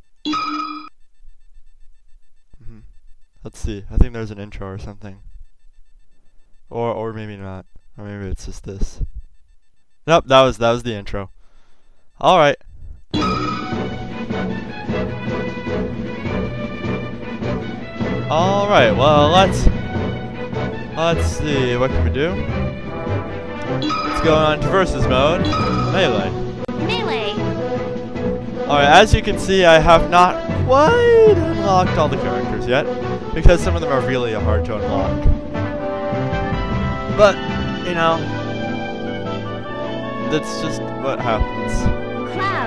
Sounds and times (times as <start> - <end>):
Speech: 3.4 - 5.2, 6.7 - 9.0, 10.1 - 11.3, 12.2 - 12.6, 18.3 - 19.7, 21.0 - 22.4, 24.2 - 25.4, 26.0 - 26.3, 26.9 - 27.4, 28.7 - 35.3, 37.2 - 38.2, 40.3 - 42.6
Music: 13.2 - 42.6.